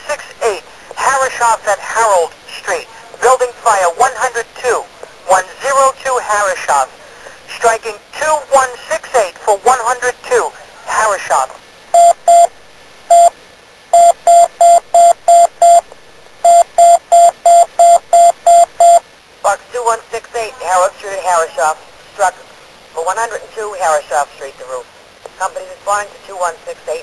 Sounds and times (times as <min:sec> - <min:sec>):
Speech: 0:00.0 - 0:11.6, 0:19.4 - 0:22.4, 0:23.0 - 0:27.0
Alarm: 0:16.5 - 0:19.0.